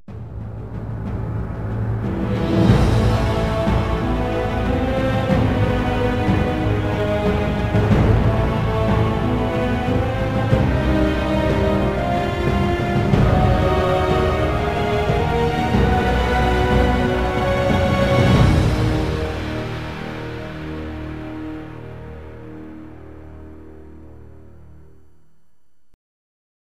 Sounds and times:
Background music: 0.1s - 25.5s.

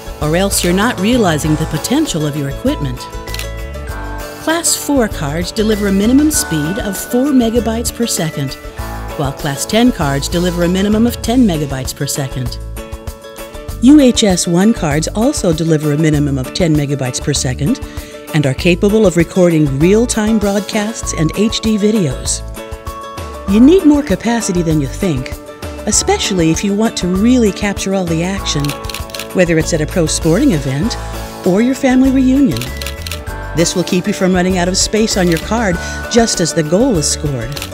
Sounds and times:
Music: 0.0s - 37.7s
Speech: 0.2s - 3.1s, 4.5s - 8.6s, 9.2s - 12.6s, 13.8s - 17.8s, 18.4s - 22.4s, 23.5s - 28.8s, 29.4s - 32.7s, 33.6s - 37.6s.

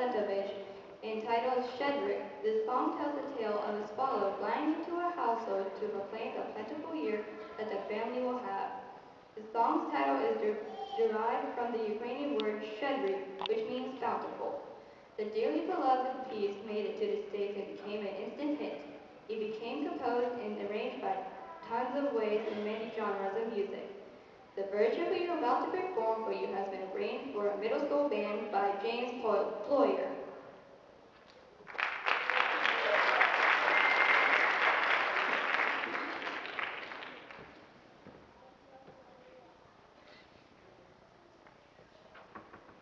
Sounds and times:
Speech: 0.0s - 8.8s, 9.4s - 14.6s, 15.2s - 24.0s, 24.6s - 30.3s.

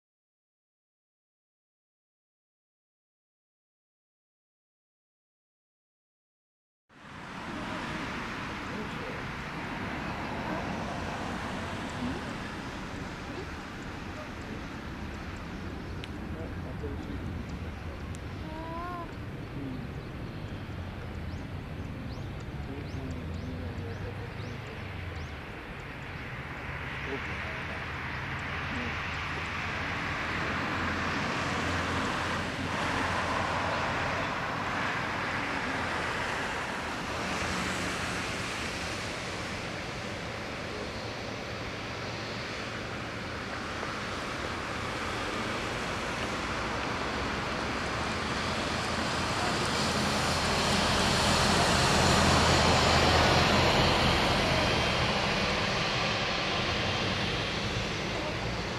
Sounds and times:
Fixed-wing aircraft, airplane: 6.9s - 58.7s
Outside, urban or manmade: 6.9s - 58.7s
Speech: 16.3s - 20.0s, 22.0s - 24.9s, 27.1s - 27.9s, 58.0s - 58.7s.

